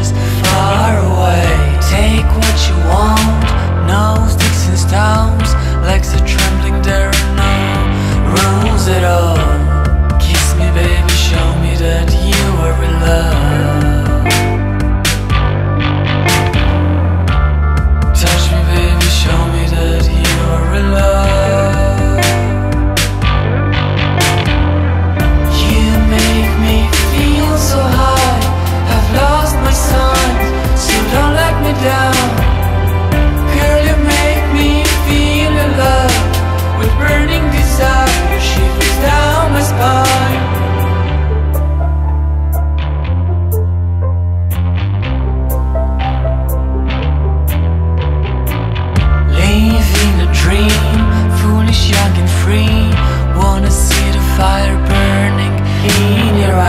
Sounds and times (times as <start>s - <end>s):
Blues: 0.0s - 56.6s
Rhythm and blues: 0.0s - 56.6s.